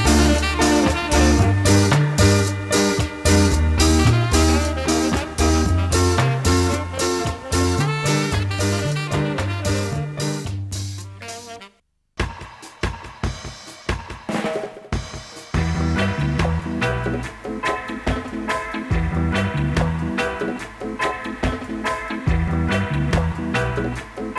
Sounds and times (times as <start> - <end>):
Ska: 0.0 - 24.3
Swing music: 0.0 - 24.3.